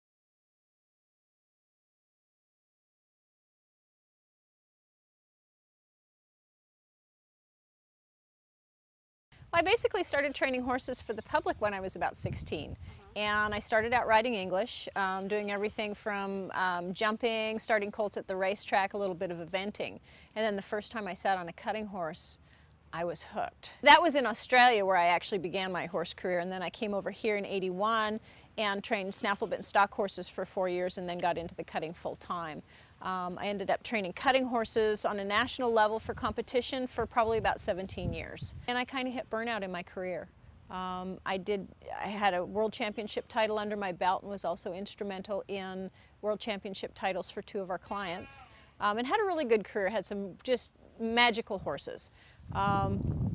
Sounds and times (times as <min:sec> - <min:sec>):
Speech: 0:09.6 - 0:22.4, 0:23.0 - 0:53.0.